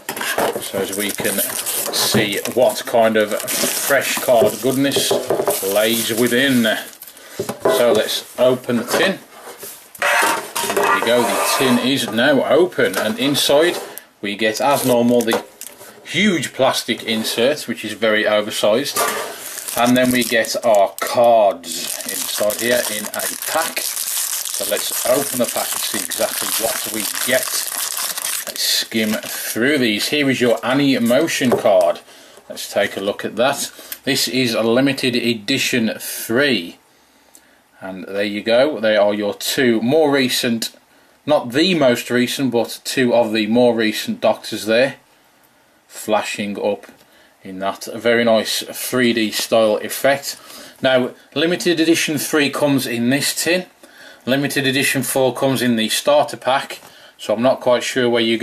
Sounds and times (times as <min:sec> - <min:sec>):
Speech: 0:00.6 - 0:07.0, 0:07.6 - 0:09.3, 0:10.8 - 0:15.5, 0:16.1 - 0:19.1, 0:19.8 - 0:23.9, 0:24.6 - 0:27.7, 0:28.5 - 0:36.8, 0:37.8 - 0:45.0, 0:45.9 - 0:58.4.